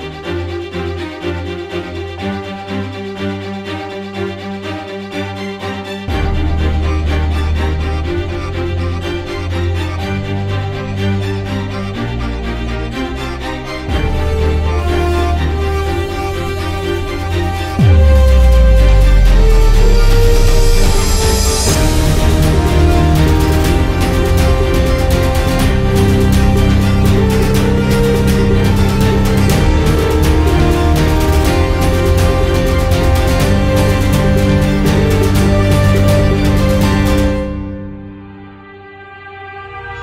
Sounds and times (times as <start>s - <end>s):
Music: 0.0s - 40.0s.